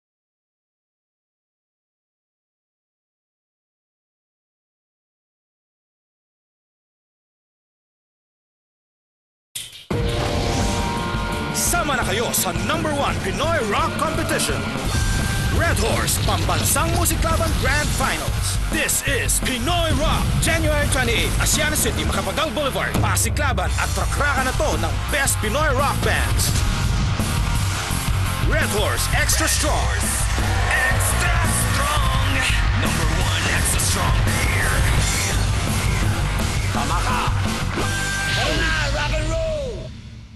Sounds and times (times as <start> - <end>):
Music: 9.6 - 40.3
Speech: 11.6 - 14.7, 15.6 - 26.5, 28.4 - 35.0, 38.4 - 39.9.